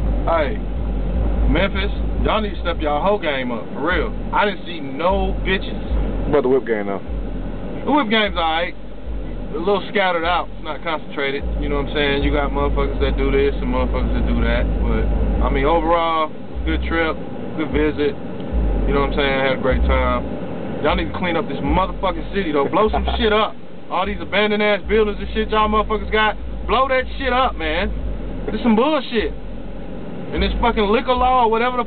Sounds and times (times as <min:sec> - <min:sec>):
Speech: 0:00.3 - 0:00.6, 0:01.5 - 0:07.0, 0:07.8 - 0:08.8, 0:09.4 - 0:18.2, 0:18.9 - 0:20.2, 0:20.8 - 0:27.9, 0:28.5 - 0:29.4, 0:30.3 - 0:31.8.